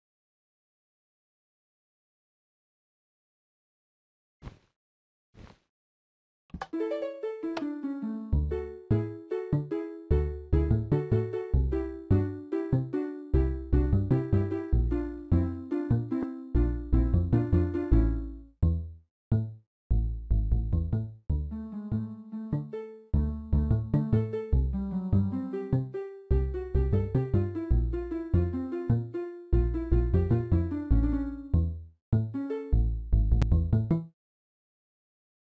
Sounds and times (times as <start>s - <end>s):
Tender music: 6.7s - 18.5s, 21.5s - 31.6s.